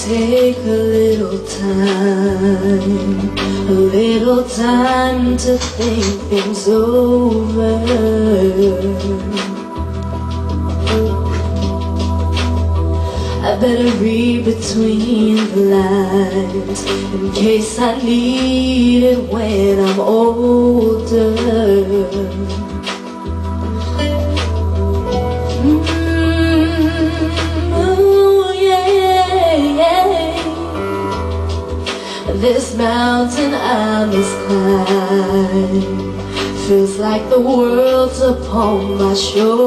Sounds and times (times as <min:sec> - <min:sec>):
Female singing: 0:00.0 - 0:09.7, 0:13.4 - 0:22.7, 0:25.6 - 0:31.4, 0:32.2 - 0:39.6
Music: 0:00.0 - 0:39.6.